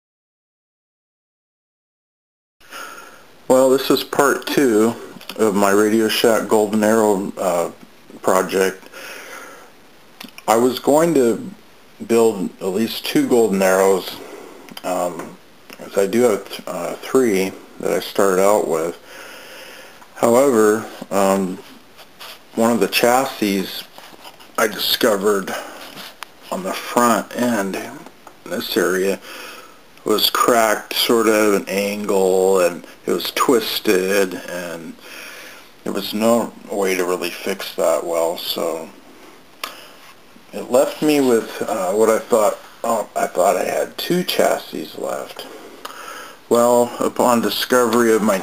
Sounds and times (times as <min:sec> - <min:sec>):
Speech: 0:03.5 - 0:08.9, 0:10.2 - 0:19.0, 0:20.2 - 0:21.8, 0:22.5 - 0:24.0, 0:24.6 - 0:29.2, 0:30.0 - 0:35.0, 0:35.8 - 0:39.0, 0:40.5 - 0:45.6, 0:46.5 - 0:48.4.